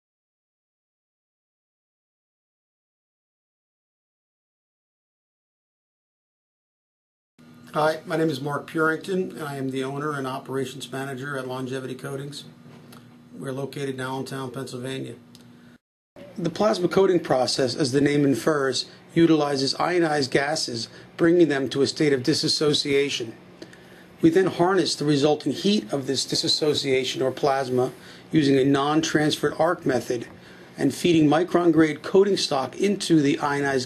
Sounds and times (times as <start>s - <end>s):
Speech: 7.7s - 12.6s, 13.3s - 15.2s, 16.2s - 23.4s, 24.2s - 33.8s.